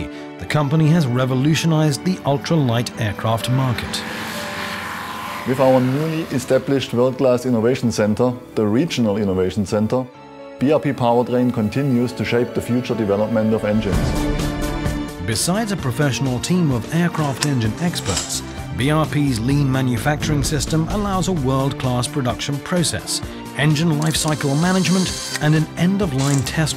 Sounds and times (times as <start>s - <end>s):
Speech: 0.0s - 4.0s, 5.5s - 14.1s, 15.2s - 26.7s
Music: 0.0s - 26.7s
Aircraft: 2.8s - 7.6s.